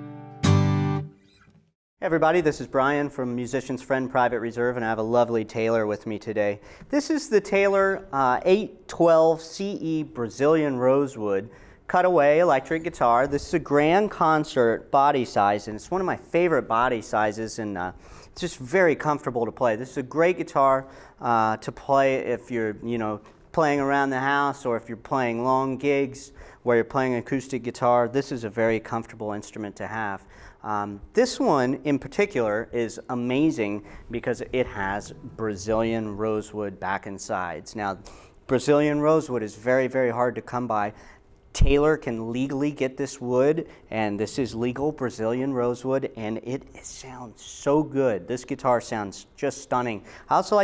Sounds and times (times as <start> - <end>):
Strum: 0.0 - 1.7, 34.0 - 36.6
Acoustic guitar: 0.0 - 2.4, 33.2 - 37.1
Speech: 2.0 - 50.6.